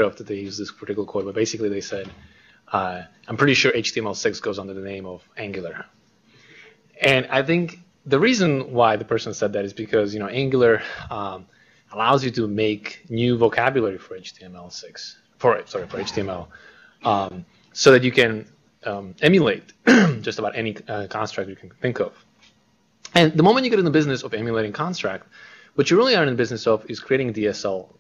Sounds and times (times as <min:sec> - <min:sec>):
Speech: 0:00.0 - 0:05.9, 0:07.0 - 0:22.2, 0:23.1 - 0:28.0.